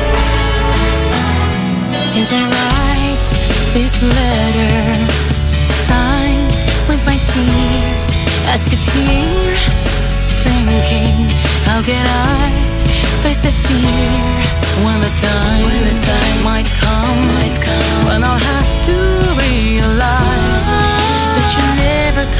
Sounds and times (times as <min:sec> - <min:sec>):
Sad music: 0:00.0 - 0:22.3.